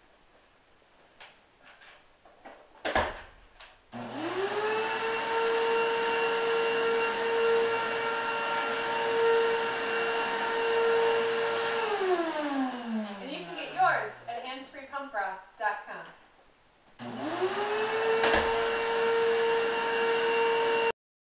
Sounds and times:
Speech: 13.0s - 16.2s.

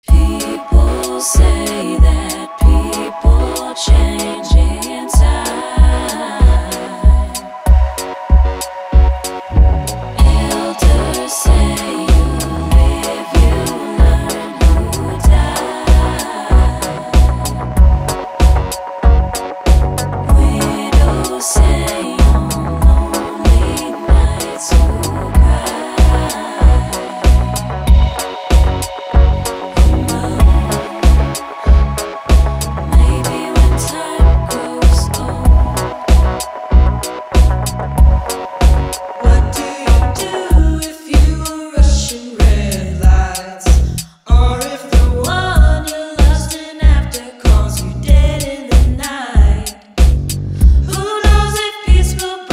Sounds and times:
Music: 0.0s - 52.5s.

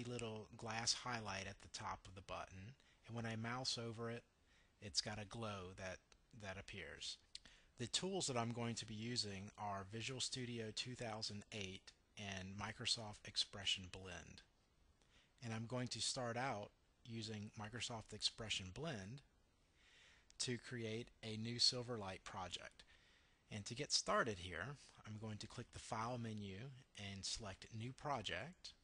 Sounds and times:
Speech: 0.0s - 14.5s, 15.4s - 19.3s, 20.4s - 22.9s, 23.5s - 28.8s.

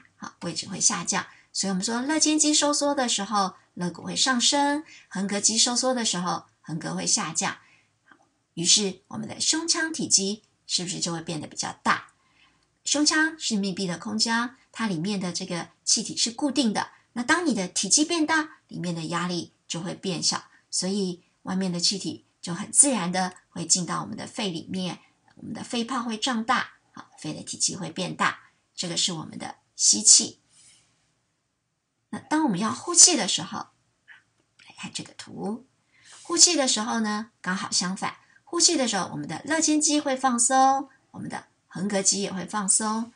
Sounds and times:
Speech: 0.0s - 7.6s, 8.6s - 12.2s, 12.9s - 30.4s, 32.2s - 33.8s, 34.6s - 43.1s.

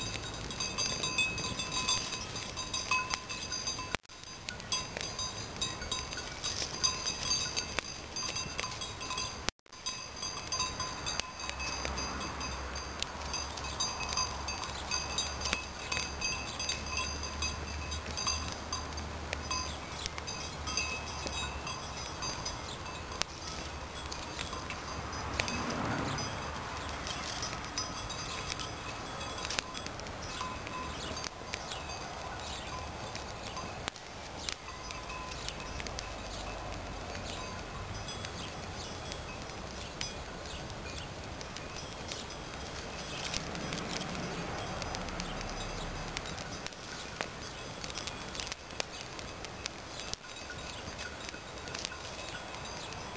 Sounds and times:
Fire: 0.0s - 53.1s
Outside, rural or natural: 0.0s - 53.1s.

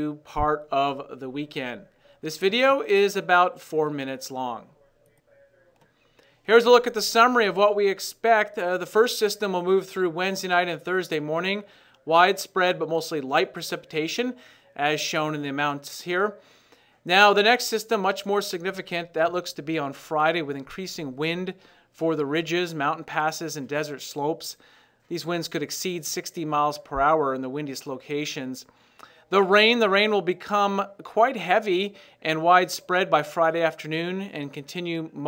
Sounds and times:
Speech: 0.0s - 16.4s, 17.1s - 28.7s, 29.3s - 35.2s.

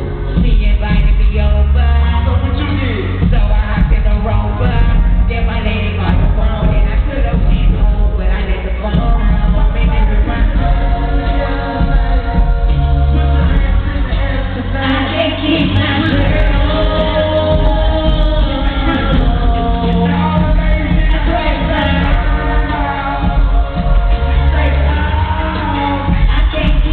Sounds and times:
Music: 0.0s - 26.9s.

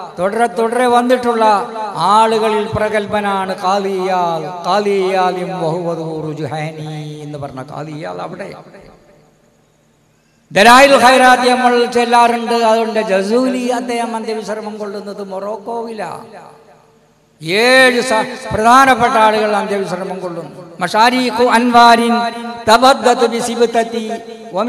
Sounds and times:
Male speech, man speaking: 0.0s - 8.6s, 10.6s - 16.4s, 17.4s - 24.6s
Narration, monologue: 0.0s - 24.6s.

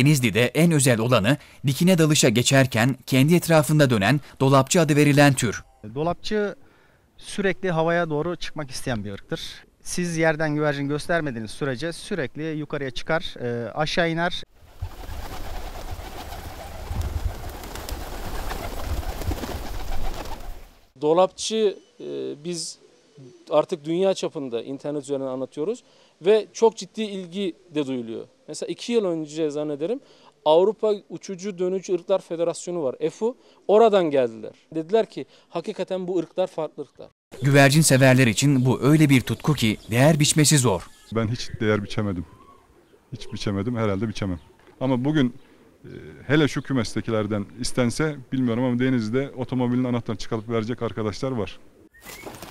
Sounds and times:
Speech: 0.0s - 6.6s, 7.2s - 14.5s, 21.0s - 42.4s, 43.1s - 51.6s
Outside, rural or natural: 0.0s - 52.5s.

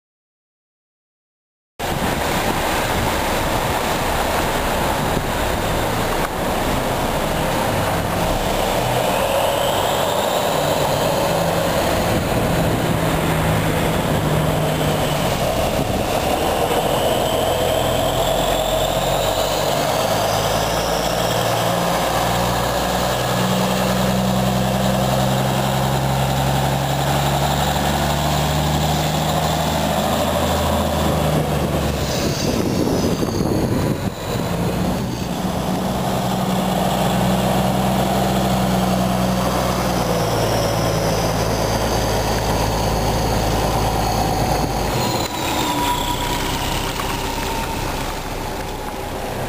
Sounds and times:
Truck: 1.8s - 49.4s.

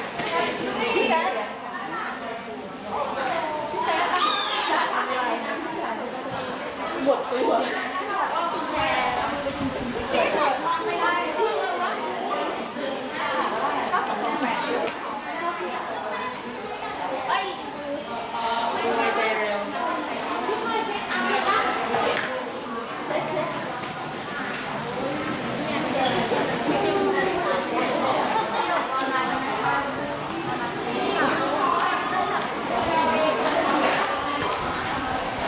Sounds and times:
Speech: 0.0s - 35.4s.

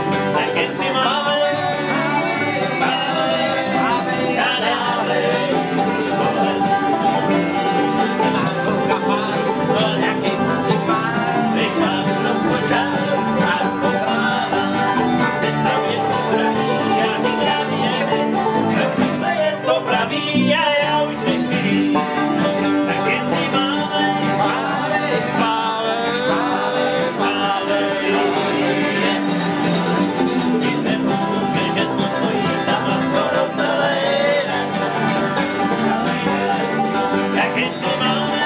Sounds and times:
Country: 0.0s - 38.4s.

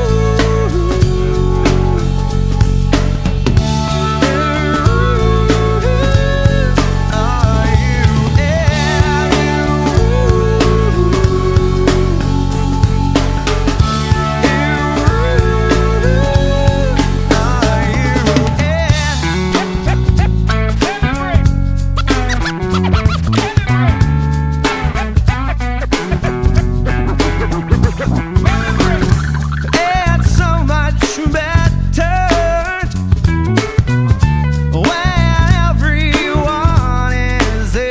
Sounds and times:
Music: 0.0s - 37.9s.

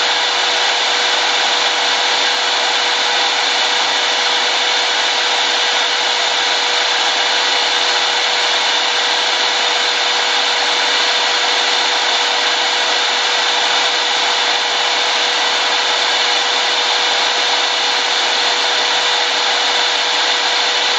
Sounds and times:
Drill: 0.0s - 20.9s.

